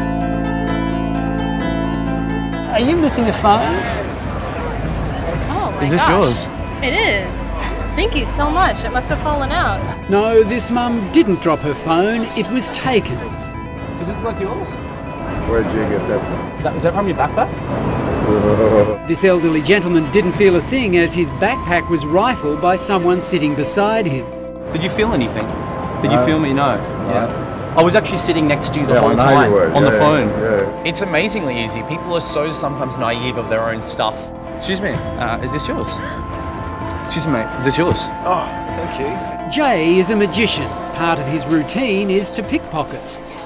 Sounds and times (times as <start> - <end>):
Music: 0.0 - 43.4.